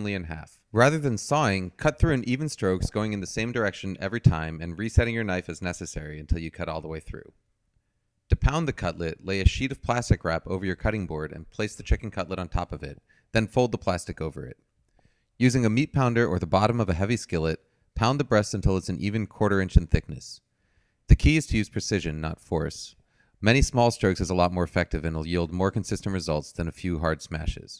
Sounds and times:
Speech: 0.0 - 7.4, 8.3 - 14.6, 15.4 - 20.4, 21.1 - 27.8.

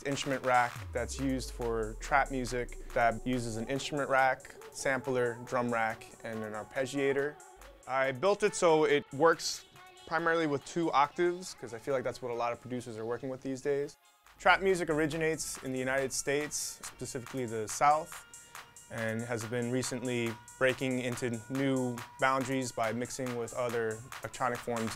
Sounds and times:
Speech: 0.0 - 18.2, 18.9 - 24.9
Music: 0.0 - 24.9.

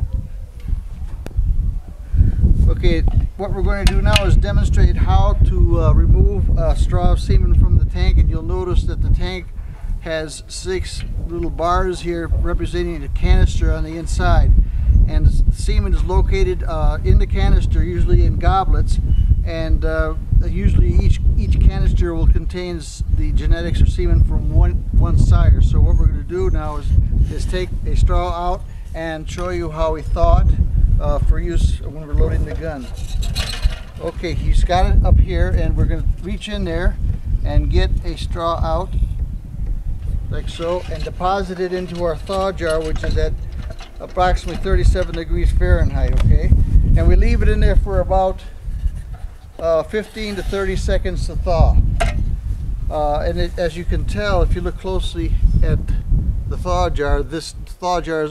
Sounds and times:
Speech: 2.6 - 14.5, 15.1 - 33.0, 34.0 - 39.0, 40.3 - 43.4, 44.0 - 48.5, 49.6 - 51.8, 52.9 - 58.3.

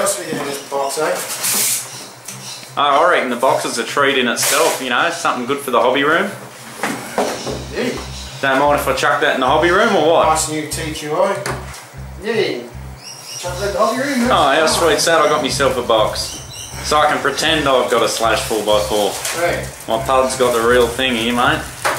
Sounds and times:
Speech: 0.0 - 1.3, 2.8 - 6.4, 7.7 - 11.5, 12.2 - 12.7, 13.4 - 21.8
Music: 6.1 - 21.9.

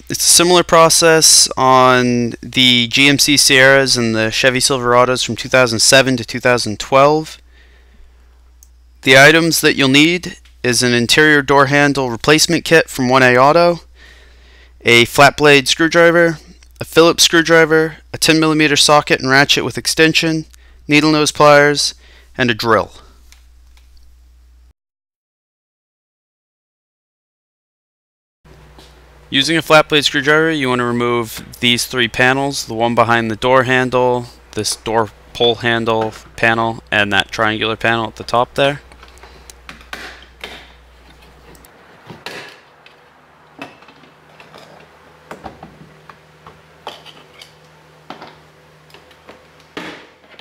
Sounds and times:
Speech: 0.0 - 7.4, 9.0 - 13.9, 14.8 - 23.2, 29.3 - 38.9.

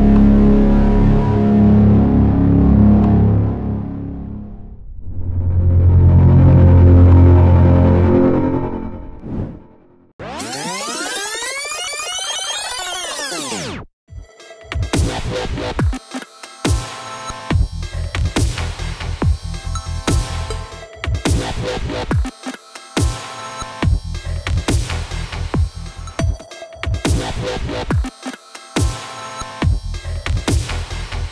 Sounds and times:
Music: 0.0 - 31.3.

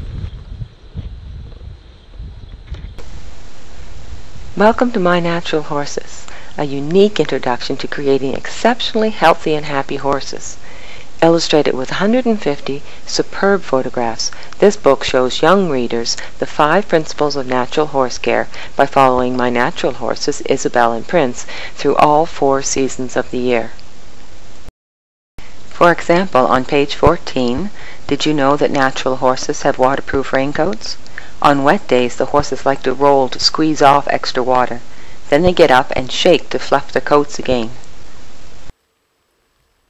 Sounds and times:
Speech: 4.6 - 10.6, 11.2 - 23.8, 25.7 - 37.8.

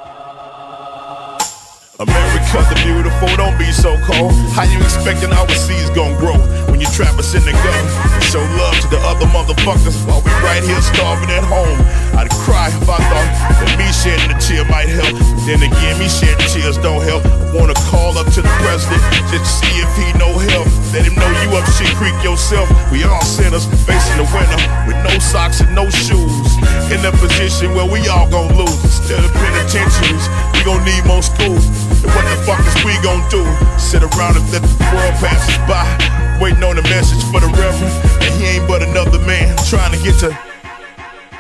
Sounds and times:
Music: 0.0 - 41.4.

